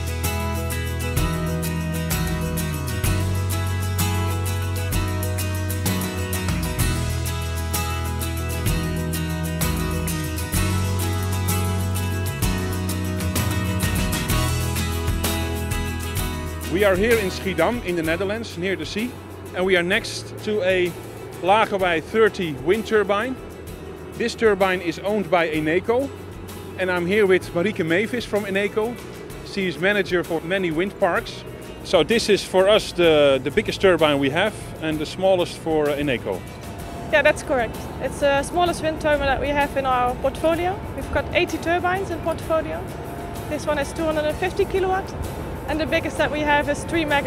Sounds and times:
Music: 0:00.0 - 0:47.2
Speech: 0:16.7 - 0:23.4, 0:24.2 - 0:26.1, 0:26.8 - 0:36.4, 0:37.2 - 0:42.8, 0:43.6 - 0:45.1, 0:45.7 - 0:47.2.

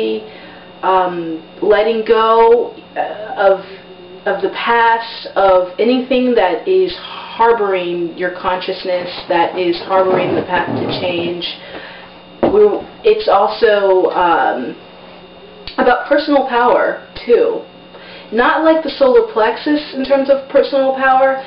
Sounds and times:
Speech: 0:00.0 - 0:11.6, 0:12.4 - 0:14.8, 0:15.7 - 0:17.7, 0:18.3 - 0:21.4.

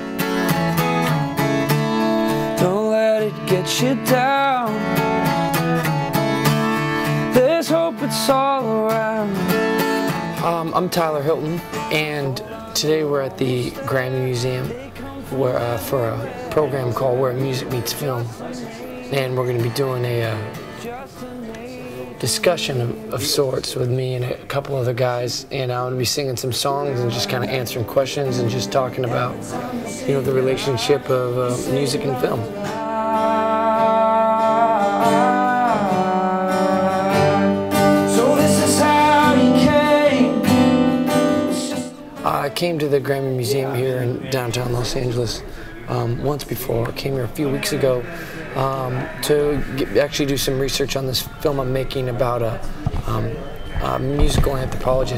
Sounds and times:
Music: 0:00.0 - 0:55.1
Singing: 0:02.0 - 0:05.3, 0:07.0 - 0:55.1
Speech: 0:10.4 - 0:21.0, 0:22.0 - 0:32.6, 0:41.6 - 0:55.1.

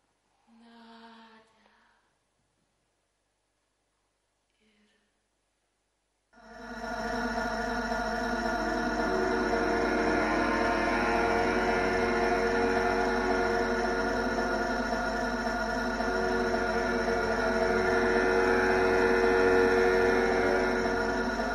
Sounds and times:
Inside, large room or hall: 0:06.4 - 0:21.5
Music: 0:06.4 - 0:21.5.

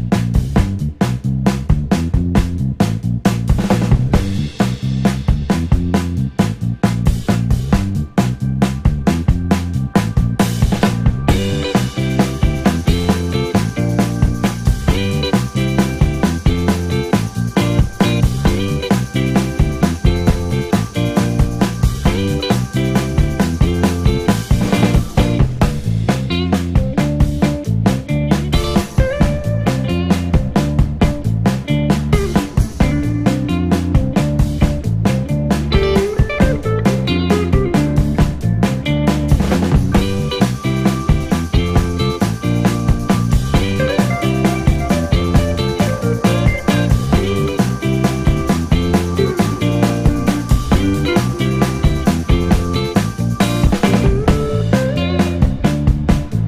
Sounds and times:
Music: 0:00.0 - 0:56.4.

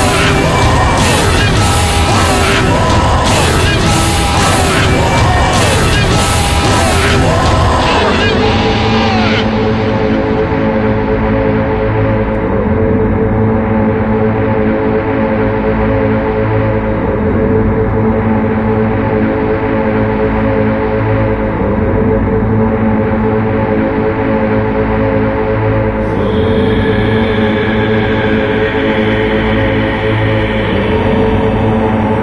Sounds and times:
Scary music: 0:00.0 - 0:32.2.

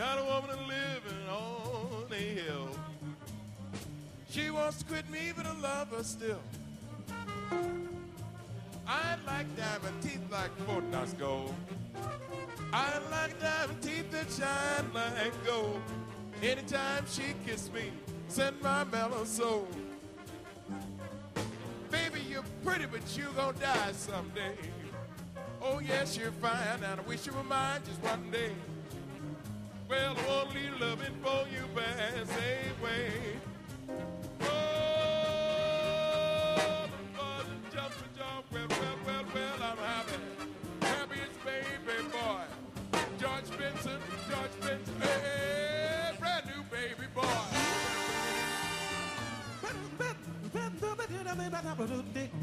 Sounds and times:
Music: 0:00.0 - 0:52.4.

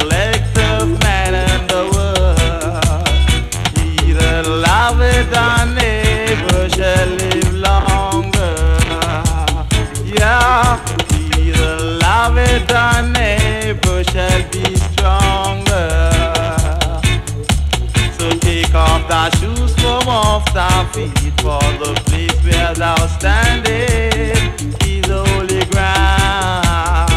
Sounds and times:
Music: 0:00.0 - 0:27.1.

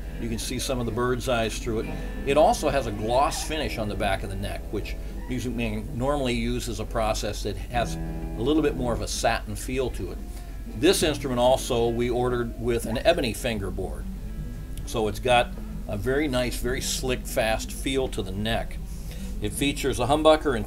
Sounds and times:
Speech: 0:00.2 - 0:10.2, 0:10.8 - 0:14.0, 0:14.8 - 0:18.8, 0:19.4 - 0:20.6
Electric guitar: 0:01.8 - 0:03.1, 0:07.8 - 0:08.5.

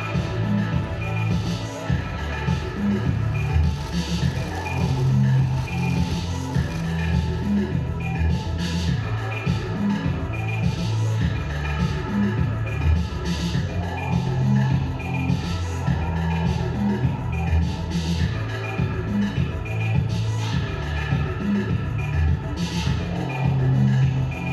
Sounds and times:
Music: 0:00.0 - 0:24.5.

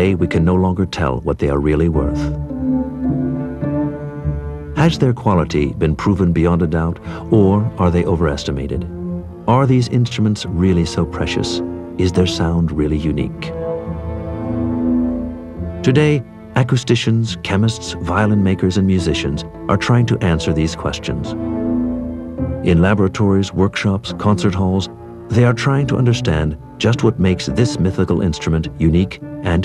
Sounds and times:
Speech: 0:00.0 - 0:02.4, 0:04.8 - 0:08.9, 0:09.5 - 0:13.5, 0:15.8 - 0:21.4, 0:22.6 - 0:29.6
Violin, fiddle: 0:00.0 - 0:29.6.

